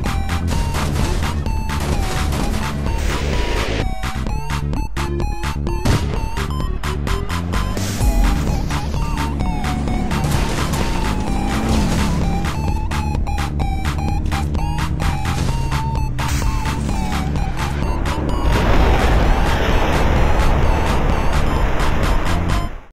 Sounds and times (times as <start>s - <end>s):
Music: 0.0s - 22.9s.